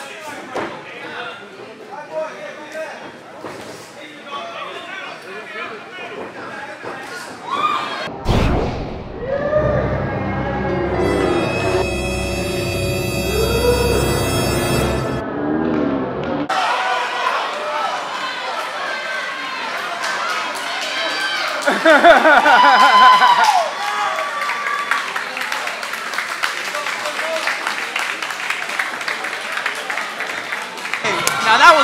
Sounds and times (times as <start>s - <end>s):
Inside, large room or hall: 0.0s - 31.8s
Scary music: 8.8s - 16.5s.